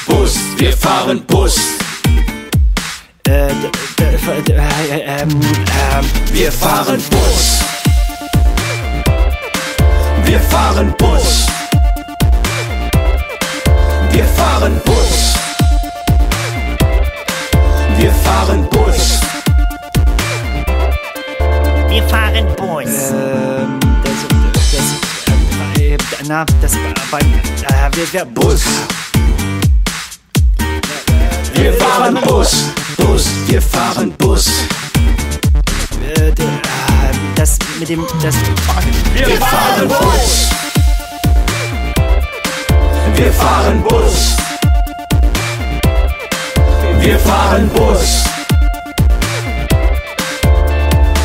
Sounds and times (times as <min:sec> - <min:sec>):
Music: 0:00.0 - 0:51.2.